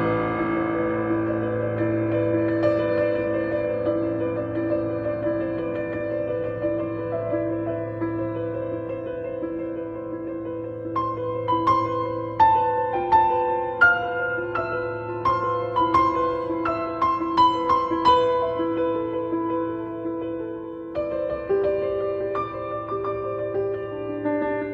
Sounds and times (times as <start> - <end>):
Music: 0.0 - 24.7.